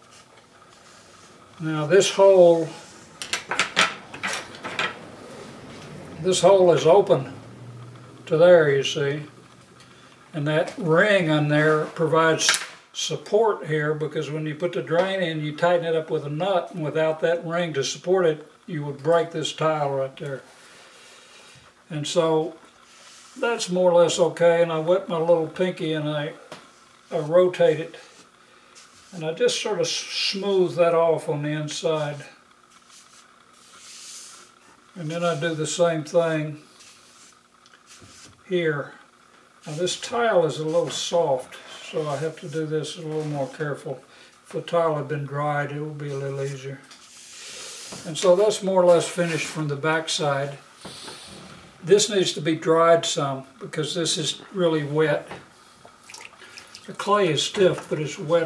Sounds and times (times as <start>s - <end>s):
Rub: 22.8s - 23.4s, 32.7s - 35.5s, 36.7s - 38.4s, 41.8s - 43.6s, 46.1s - 49.6s.